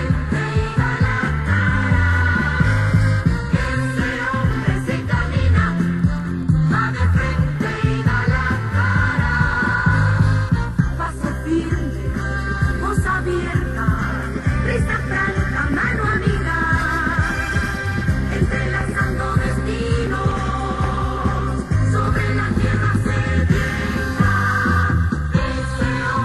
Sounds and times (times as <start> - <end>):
Music: 0.0 - 26.2.